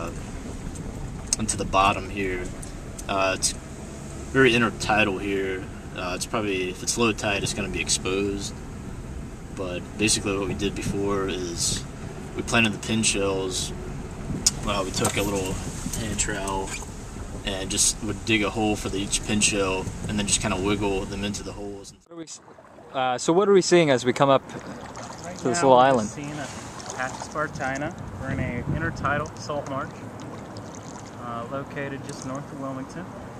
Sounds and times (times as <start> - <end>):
Speech: 1.4 - 2.5, 3.1 - 3.6, 4.4 - 8.5, 9.6 - 11.8, 12.4 - 13.7, 14.5 - 16.8, 17.5 - 22.4, 25.3 - 30.0, 31.2 - 33.1
Boat, Water vehicle: 19.0 - 32.4.